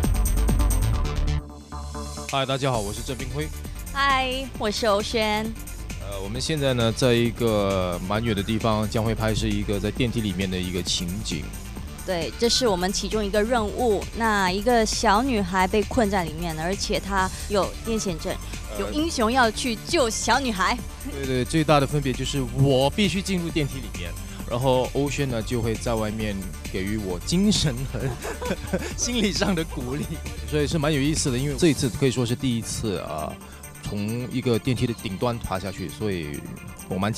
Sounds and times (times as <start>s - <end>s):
Music: 0.0s - 37.1s
Speech: 2.3s - 5.5s, 6.1s - 11.5s, 12.1s - 28.1s, 29.0s - 37.1s.